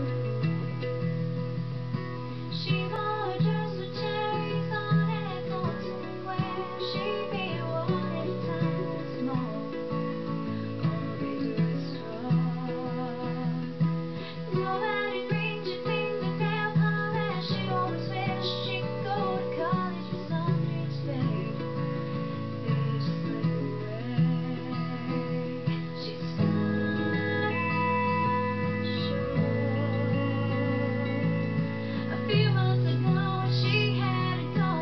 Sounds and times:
Music: 0.0s - 34.8s.

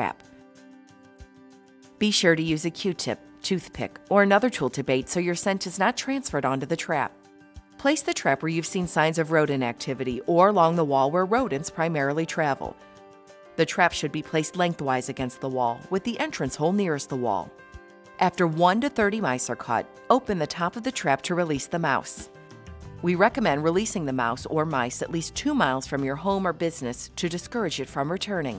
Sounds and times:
Music: 0.0s - 28.5s
Speech: 2.0s - 7.1s, 7.8s - 12.8s, 13.6s - 17.5s, 18.2s - 22.3s, 23.0s - 28.5s.

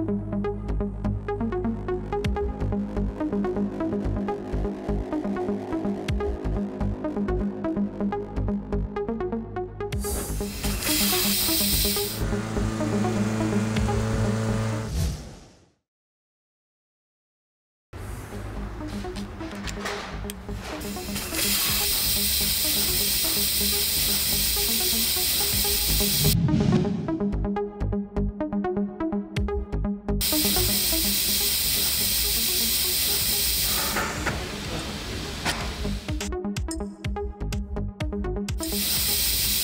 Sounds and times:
Music: 0.0s - 15.4s, 18.0s - 39.6s.

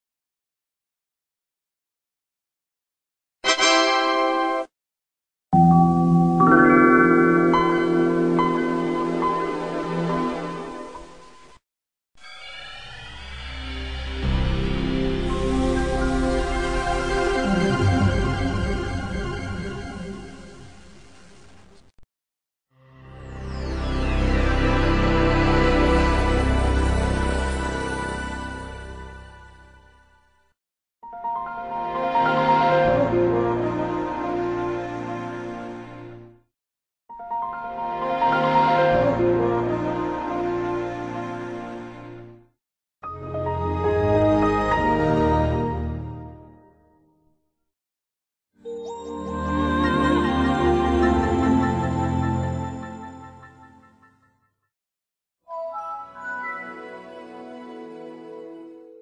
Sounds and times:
Music: 3.4s - 4.7s, 5.6s - 11.6s, 12.2s - 21.6s, 22.7s - 36.5s, 37.1s - 47.5s, 48.6s - 54.7s, 55.5s - 59.0s.

